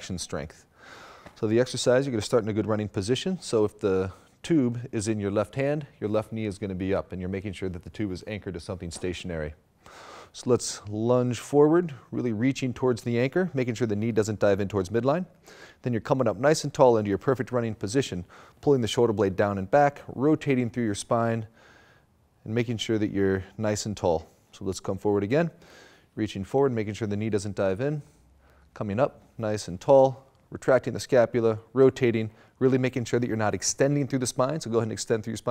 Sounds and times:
Speech: 0.0s - 0.6s, 1.4s - 9.6s, 10.3s - 21.5s, 22.4s - 25.6s, 26.2s - 28.1s, 28.8s - 35.5s.

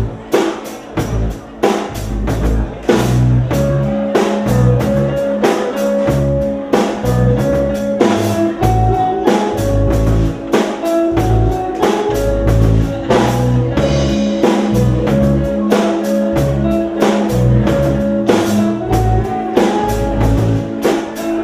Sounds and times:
Music: 0.0s - 21.4s
Speech: 0.0s - 21.4s.

